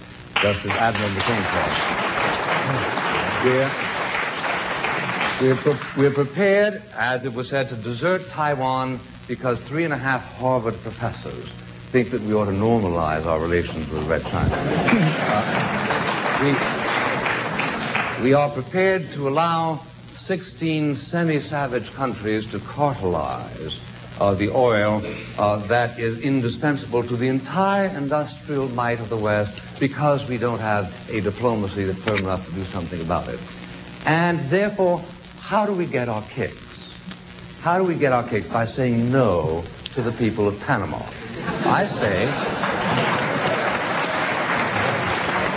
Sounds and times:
Narration, monologue: 0:00.2 - 0:01.9, 0:05.4 - 0:15.8, 0:18.2 - 0:42.5
Male speech, man speaking: 0:00.4 - 0:01.9, 0:03.3 - 0:03.8, 0:05.4 - 0:15.6, 0:16.4 - 0:16.7, 0:18.2 - 0:33.4, 0:34.1 - 0:37.0, 0:37.6 - 0:42.4.

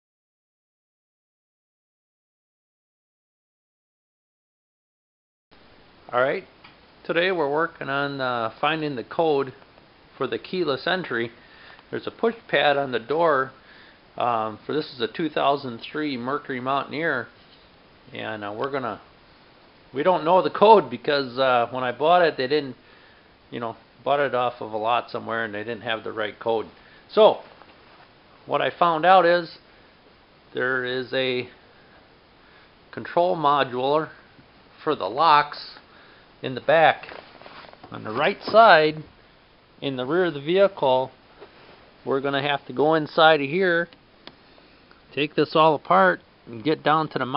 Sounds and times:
Speech: 0:06.1 - 0:09.6, 0:10.2 - 0:13.6, 0:14.2 - 0:17.3, 0:18.1 - 0:19.1, 0:19.9 - 0:22.8, 0:23.5 - 0:27.5, 0:28.4 - 0:29.6, 0:30.5 - 0:31.6, 0:32.9 - 0:34.2, 0:34.8 - 0:35.8, 0:36.4 - 0:37.2, 0:37.9 - 0:39.1, 0:39.8 - 0:41.2, 0:42.0 - 0:44.0, 0:45.1 - 0:47.3.

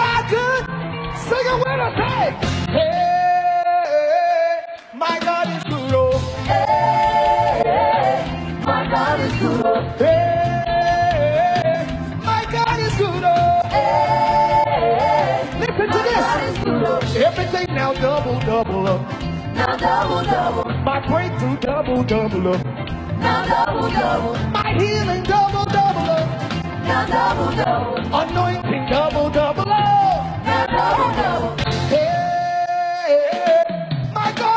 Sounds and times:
Male singing: 0:02.8 - 0:06.3, 0:10.0 - 0:13.7, 0:31.9 - 0:34.5
Choir: 0:06.2 - 0:11.9, 0:13.4 - 0:18.0, 0:19.5 - 0:20.7, 0:23.2 - 0:24.6, 0:26.7 - 0:29.0, 0:30.2 - 0:32.4.

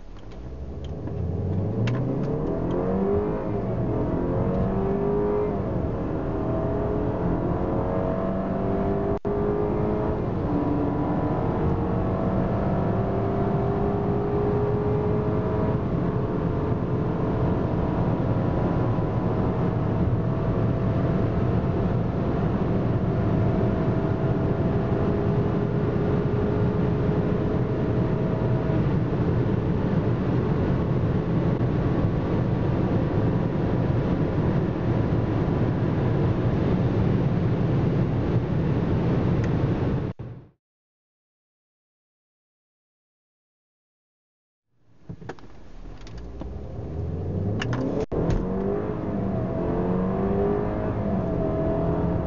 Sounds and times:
Car: 0:00.0 - 0:40.6, 0:44.7 - 0:52.2
Accelerating, revving, vroom: 0:00.9 - 0:32.0, 0:46.3 - 0:52.2.

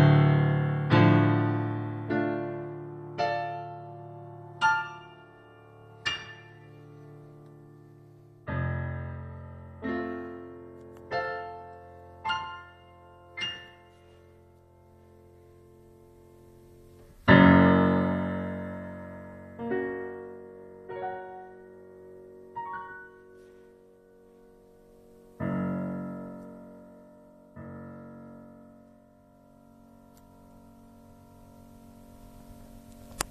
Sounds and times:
Music: 0:00.0 - 0:33.3.

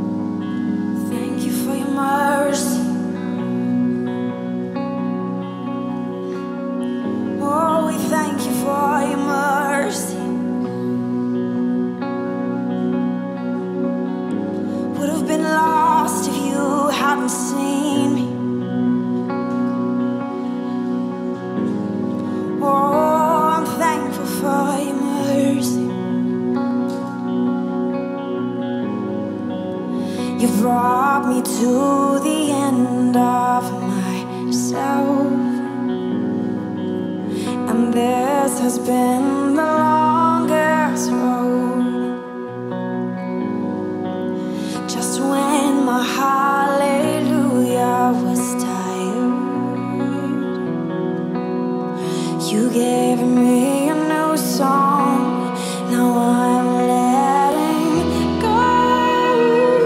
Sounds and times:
Music: 0:00.0 - 0:59.8.

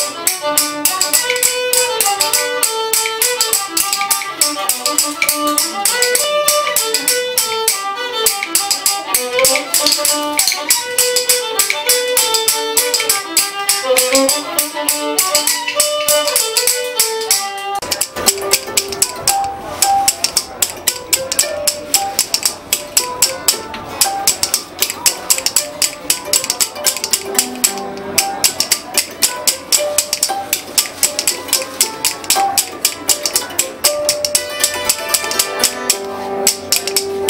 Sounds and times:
Musical instrument: 0:00.0 - 0:37.3.

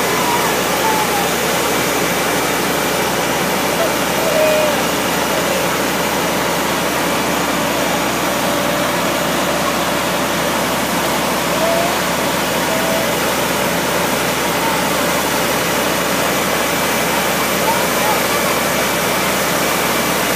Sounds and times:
Speech: 0:17.1 - 0:19.0.

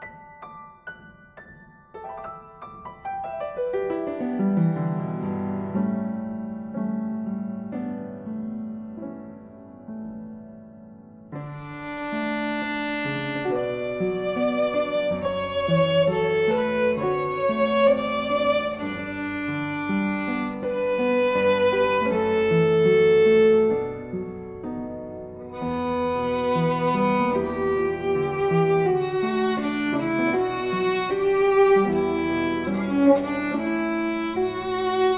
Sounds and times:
Violin, fiddle: 0:11.4 - 0:24.7, 0:25.4 - 0:35.1.

